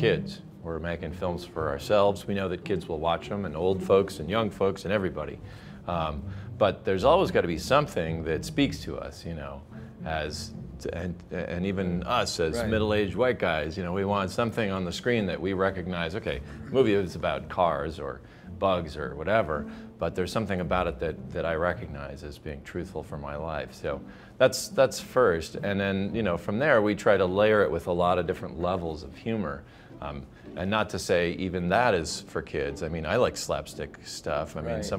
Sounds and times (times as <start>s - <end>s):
Music: 0.0s - 34.9s
Speech: 0.0s - 34.9s.